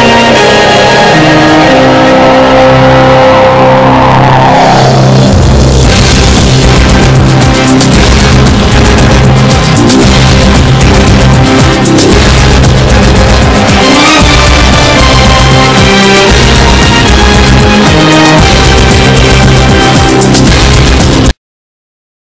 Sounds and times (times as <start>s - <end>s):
Music: 0.0s - 21.4s.